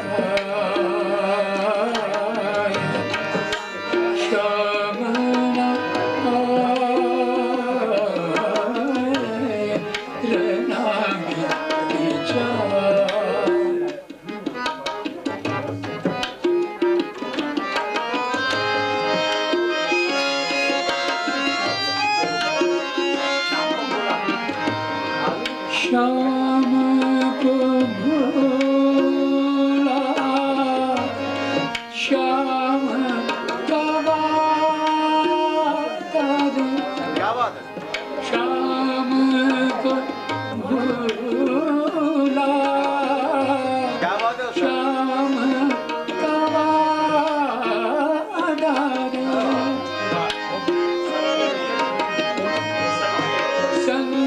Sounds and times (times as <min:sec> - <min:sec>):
Tabla: 0:00.0 - 0:54.2.